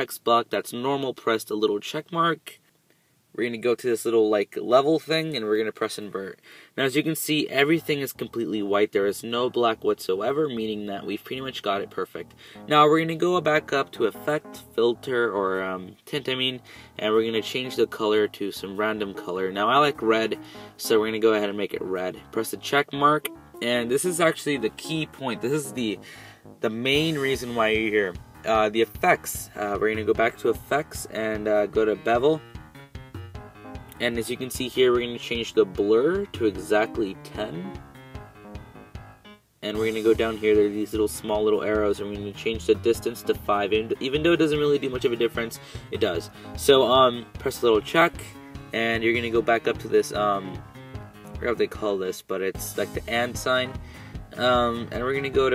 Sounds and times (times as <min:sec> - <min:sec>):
Speech: 0:00.0 - 0:02.6, 0:03.4 - 0:26.0, 0:26.6 - 0:32.4, 0:34.0 - 0:37.8, 0:39.6 - 0:50.6, 0:51.4 - 0:55.5
Music: 0:07.5 - 0:55.5.